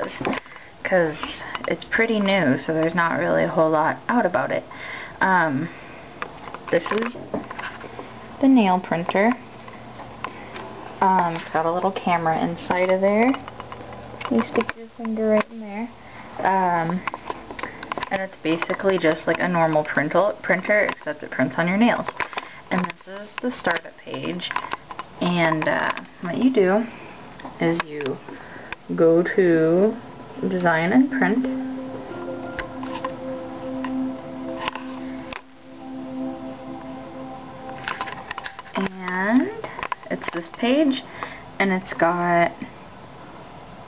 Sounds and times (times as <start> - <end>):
Speech: 0.0 - 5.7, 6.7 - 7.3, 8.4 - 9.4, 11.0 - 13.4, 14.3 - 17.0, 18.1 - 22.1, 22.7 - 24.5, 25.2 - 26.9, 27.6 - 28.2, 28.9 - 31.6, 38.8 - 42.7.